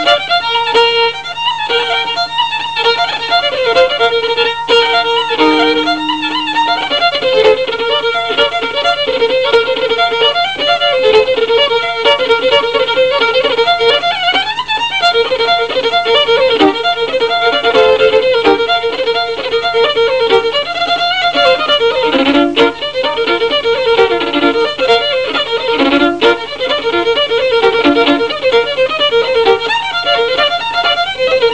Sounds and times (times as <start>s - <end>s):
Violin, fiddle: 0.0s - 31.5s.